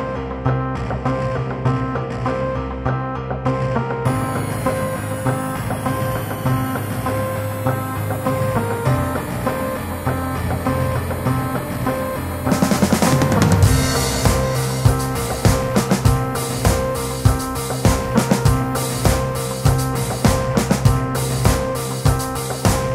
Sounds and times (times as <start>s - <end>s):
Music: 0.0s - 22.9s.